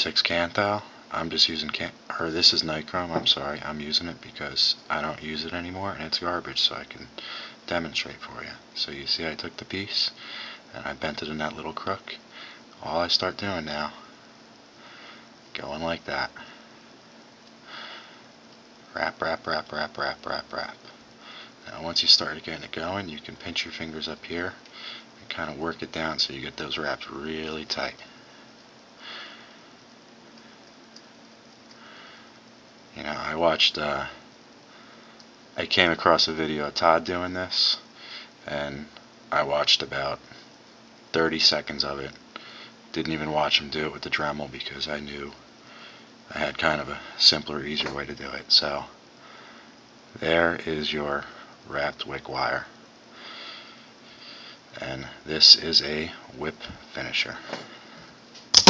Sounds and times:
Speech: 0:00.0 - 0:12.2, 0:12.8 - 0:14.1, 0:15.5 - 0:16.4, 0:18.9 - 0:20.9, 0:21.7 - 0:24.6, 0:25.2 - 0:28.1, 0:33.0 - 0:34.2, 0:35.6 - 0:40.2, 0:41.1 - 0:42.2, 0:43.0 - 0:45.4, 0:46.3 - 0:49.0, 0:50.2 - 0:52.7, 0:54.8 - 0:57.5.

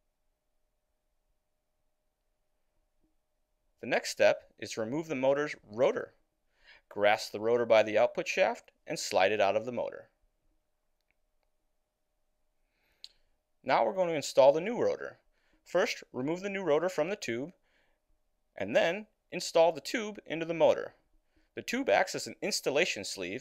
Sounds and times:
Speech: 0:03.8 - 0:06.2, 0:06.9 - 0:10.2, 0:13.6 - 0:17.6, 0:18.6 - 0:21.0, 0:21.6 - 0:23.4.

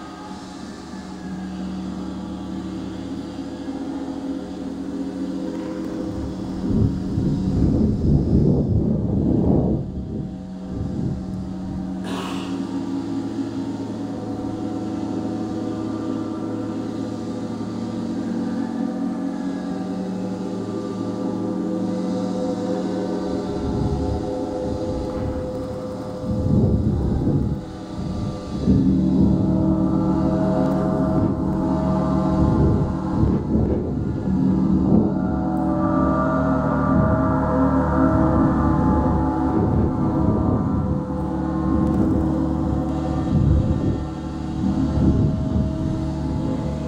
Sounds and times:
Gong: 0:00.0 - 0:46.8.

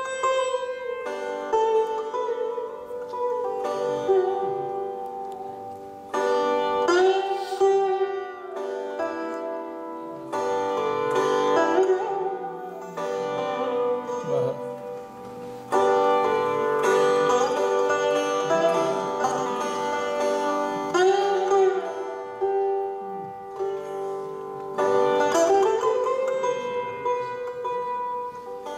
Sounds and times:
Sitar: 0:00.0 - 0:28.7.

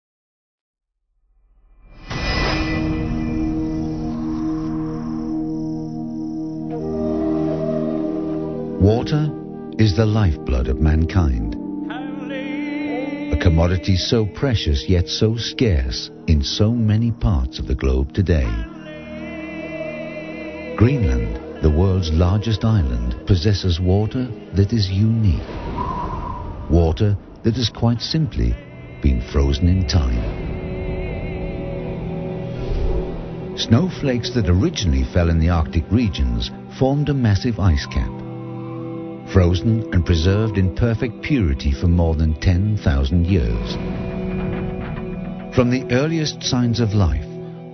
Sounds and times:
Speech: 0:08.8 - 0:12.3, 0:13.3 - 0:18.8, 0:20.8 - 0:25.4, 0:26.7 - 0:30.3, 0:33.6 - 0:38.2, 0:39.3 - 0:43.8, 0:45.6 - 0:47.4.

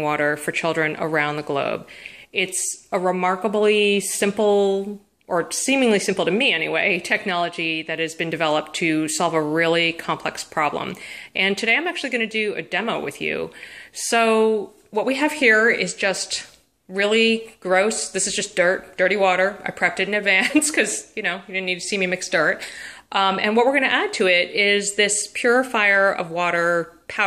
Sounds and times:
Speech: 0:00.0 - 0:27.2.

